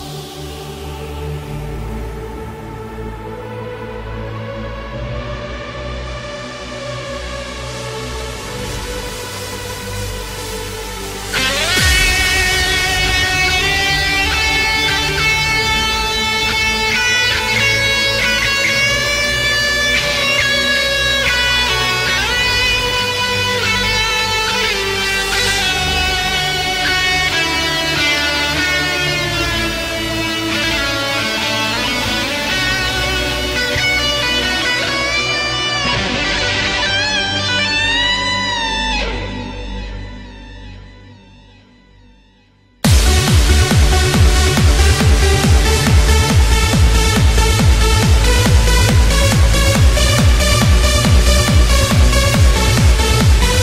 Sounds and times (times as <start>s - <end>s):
Electronic music: 0.0s - 53.6s.